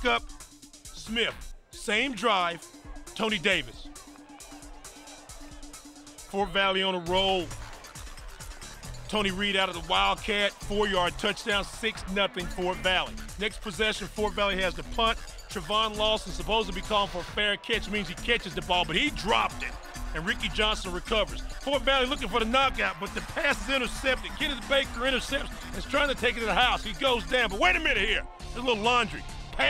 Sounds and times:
Speech: 0:00.0 - 0:00.2, 0:01.0 - 0:02.6, 0:03.2 - 0:03.9, 0:06.3 - 0:07.5, 0:09.1 - 0:29.6
Music: 0:00.0 - 0:29.6.

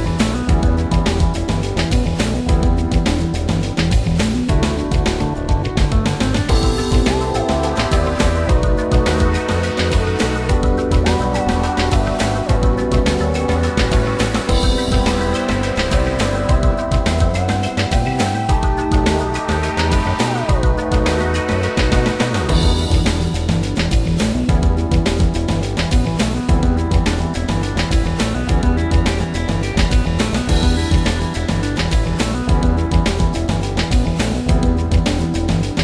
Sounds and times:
Theme music: 0:04.7 - 0:32.4.

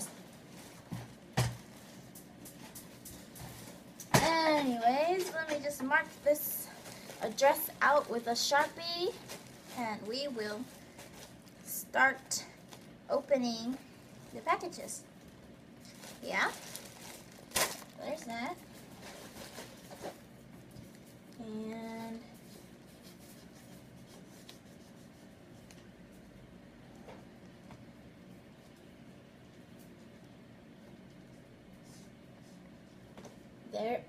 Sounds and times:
Speech: 0:04.2 - 0:10.7, 0:11.7 - 0:13.8, 0:14.4 - 0:15.0, 0:16.2 - 0:16.6, 0:18.0 - 0:18.6, 0:21.4 - 0:22.3, 0:33.7 - 0:34.0.

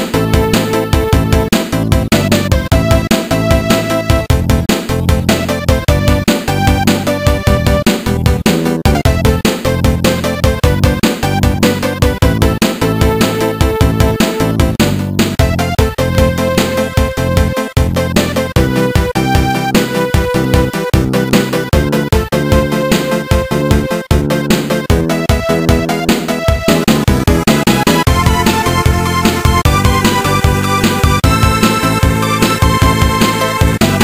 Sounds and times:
Theme music: 0:00.0 - 0:34.0
Video game music: 0:00.0 - 0:34.0.

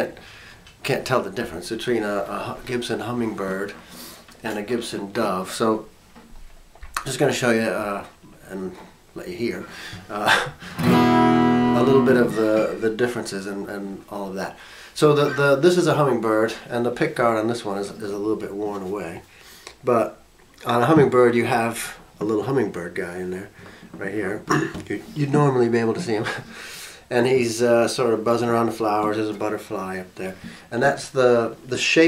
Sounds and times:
Speech: 0:00.0 - 0:00.2, 0:00.8 - 0:03.8, 0:04.4 - 0:05.9, 0:07.0 - 0:10.6, 0:11.8 - 0:26.5, 0:27.1 - 0:32.0.

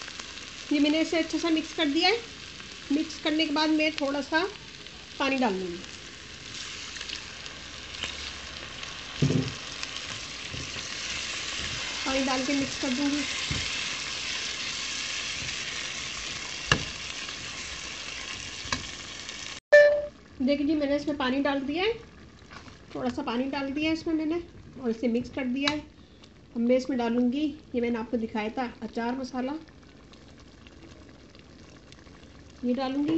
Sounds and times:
Frying (food): 0:00.0 - 0:33.1
Sizzle: 0:00.0 - 0:33.1.

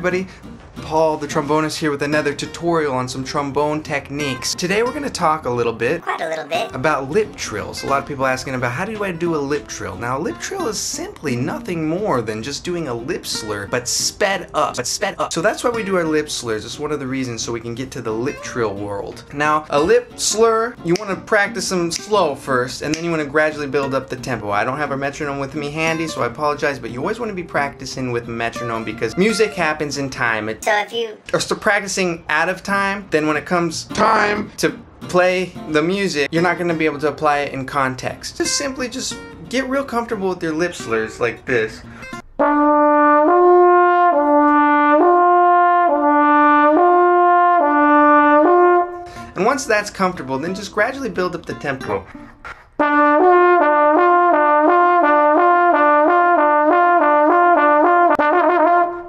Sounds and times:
Speech: 0:00.0 - 0:41.9, 0:49.4 - 0:52.1
Trumpet: 0:28.5 - 0:30.0, 0:33.9 - 0:34.6, 0:42.1 - 0:49.3, 0:51.8 - 0:59.0
Trombone: 0:34.0 - 0:34.6, 0:42.3 - 0:49.2, 0:52.8 - 0:59.0.

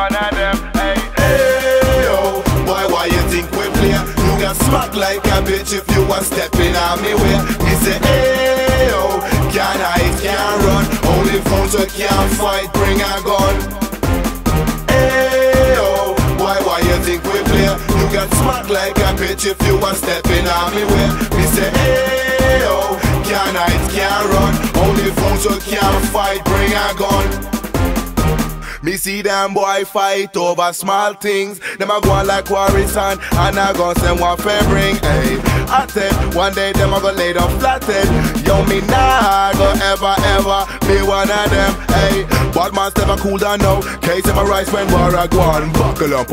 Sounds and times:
Music: 0:00.0 - 0:29.7, 0:31.6 - 0:46.3.

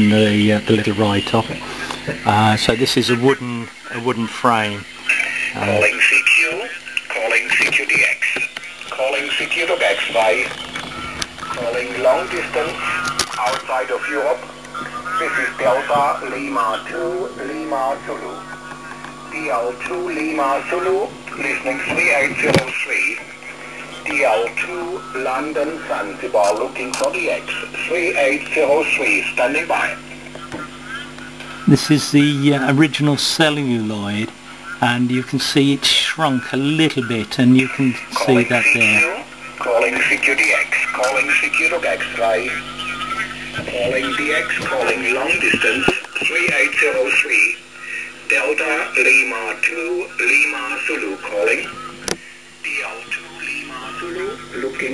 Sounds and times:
Radio: 0:00.0 - 0:54.9
Speech: 0:00.0 - 0:54.9.

